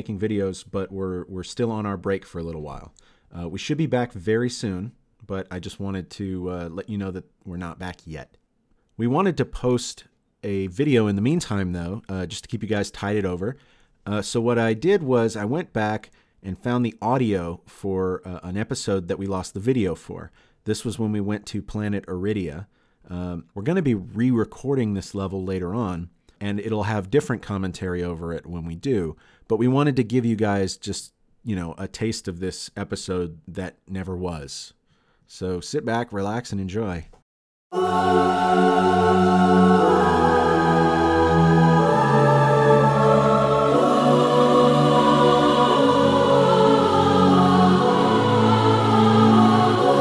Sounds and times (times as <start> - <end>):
Speech: 0.0 - 8.4, 9.0 - 37.2.